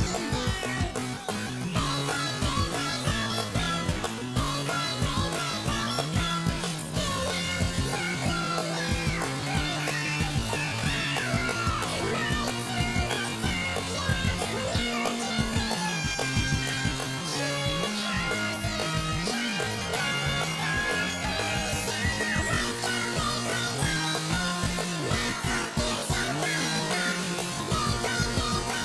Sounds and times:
Music: 0:00.0 - 0:28.8.

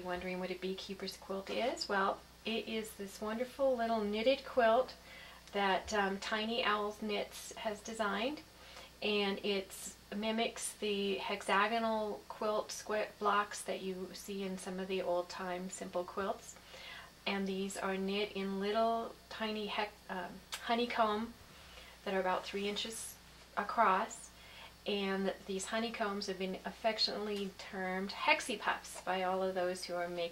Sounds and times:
Speech: 0:00.0 - 0:08.4, 0:09.0 - 0:16.6, 0:17.2 - 0:21.4, 0:22.0 - 0:30.3.

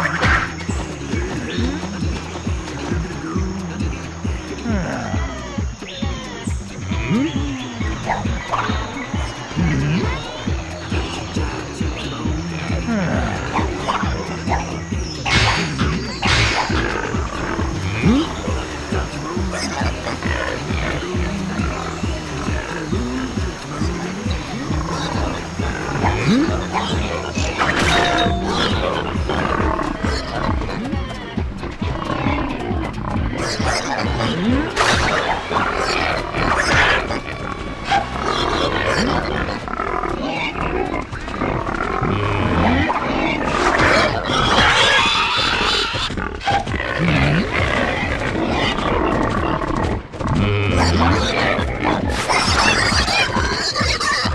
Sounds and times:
Music: 0:00.0 - 0:54.3.

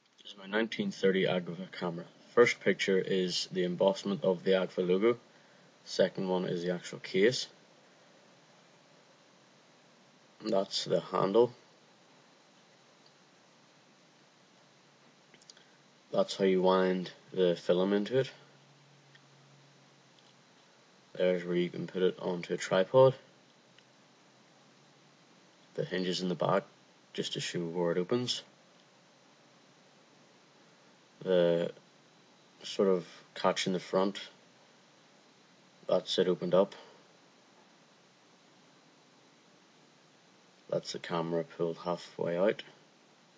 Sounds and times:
Speech: 0:00.2 - 0:05.2, 0:05.8 - 0:07.6, 0:10.4 - 0:11.6, 0:16.1 - 0:18.5, 0:21.1 - 0:23.3, 0:25.8 - 0:28.5, 0:31.2 - 0:31.8, 0:32.6 - 0:34.4, 0:35.9 - 0:37.0, 0:40.7 - 0:42.8.

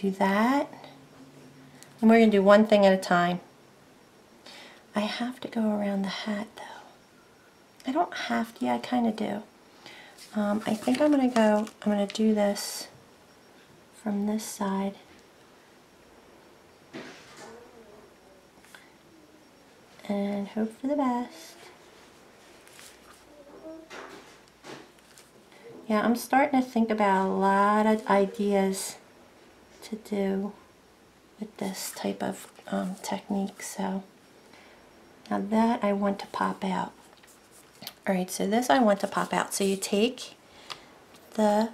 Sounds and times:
Inside, small room: 0:00.0 - 0:41.7.

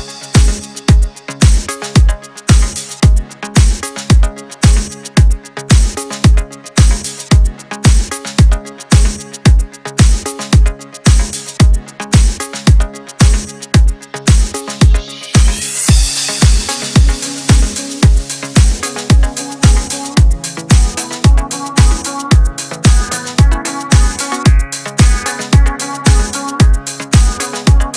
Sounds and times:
Music: 0:00.0 - 0:27.9.

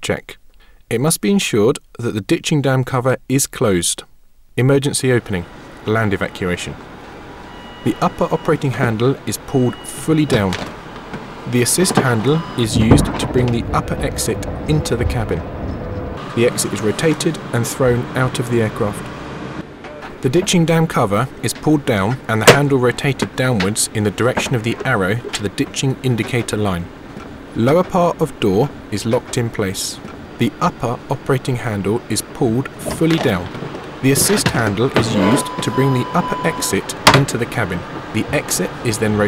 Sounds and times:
Speech: 0:00.0 - 0:06.8, 0:07.8 - 0:10.6, 0:11.5 - 0:15.4, 0:16.4 - 0:19.1, 0:20.2 - 0:26.9, 0:27.6 - 0:39.2.

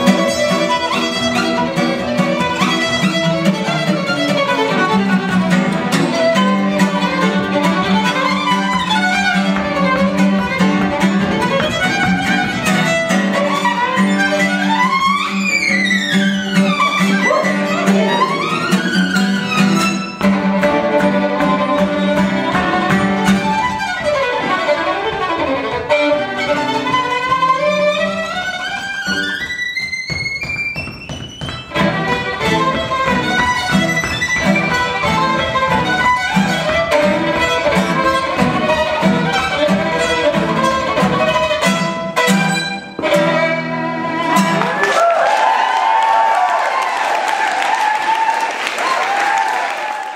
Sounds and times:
Violin, fiddle: 0:00.0 - 0:44.8.

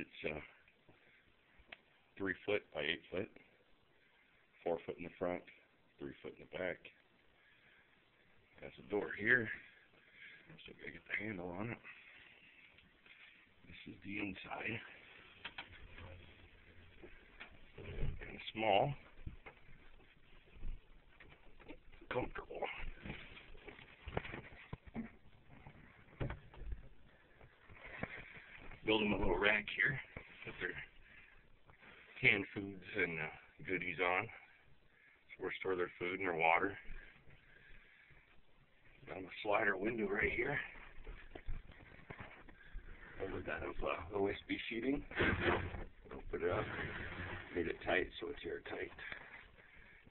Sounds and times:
Speech: 0:00.0 - 0:00.6, 0:02.2 - 0:03.5, 0:04.6 - 0:07.0, 0:08.6 - 0:09.7, 0:10.6 - 0:12.0, 0:13.7 - 0:15.0, 0:17.8 - 0:19.1, 0:22.0 - 0:23.0, 0:28.8 - 0:30.9, 0:32.2 - 0:34.5, 0:35.3 - 0:36.9, 0:39.0 - 0:40.8, 0:43.2 - 0:45.6, 0:46.2 - 0:49.2.

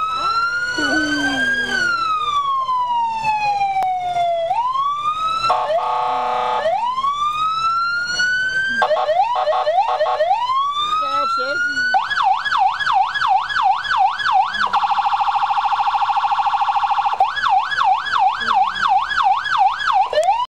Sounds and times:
Police car (siren): 0:00.0 - 0:20.4
Speech: 0:18.3 - 0:19.0.

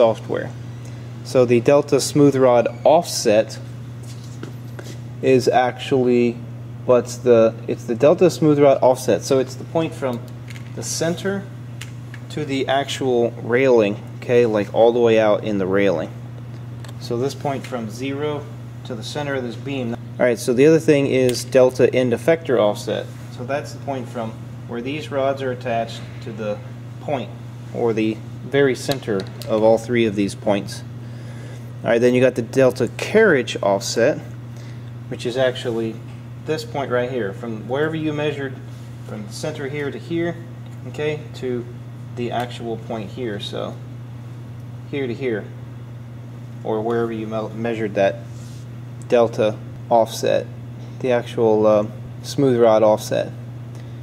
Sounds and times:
Speech: 0:00.0 - 0:00.6, 0:01.3 - 0:03.7, 0:05.2 - 0:11.5, 0:12.3 - 0:16.2, 0:17.0 - 0:30.9, 0:31.8 - 0:34.3, 0:35.1 - 0:43.8, 0:44.9 - 0:45.6, 0:46.6 - 0:48.2, 0:49.1 - 0:53.4.

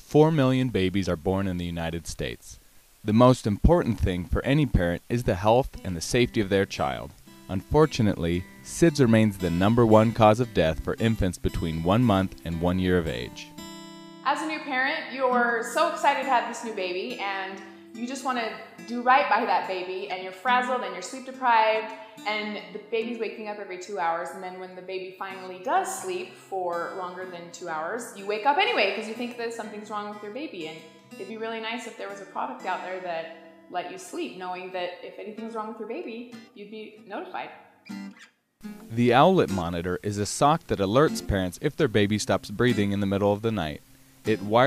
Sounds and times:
Speech: 0:00.0 - 0:13.5, 0:14.3 - 0:37.5, 0:38.9 - 0:44.6
Music: 0:03.1 - 0:44.6.

